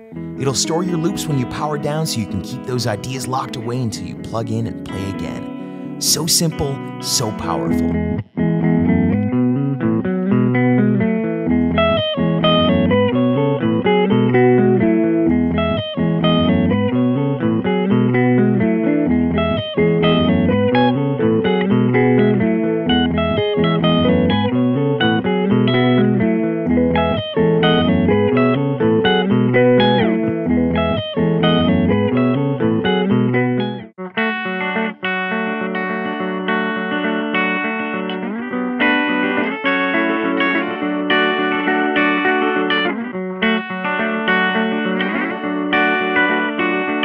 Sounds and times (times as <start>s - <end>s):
Bass guitar: 0.0s - 33.9s
Distortion: 0.0s - 47.0s
Effects unit: 0.0s - 47.0s
Electric guitar: 0.0s - 47.0s
Speech: 0.4s - 8.0s.